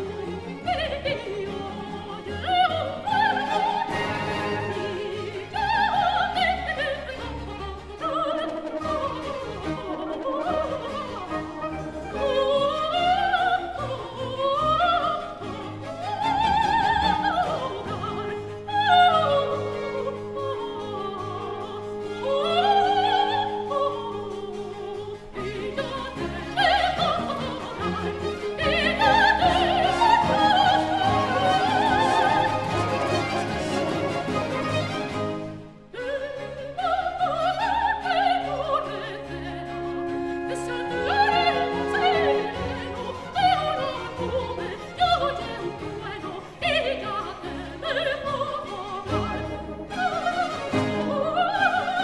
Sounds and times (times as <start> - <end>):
Opera: 0.0 - 52.0
Orchestra: 0.0 - 52.0.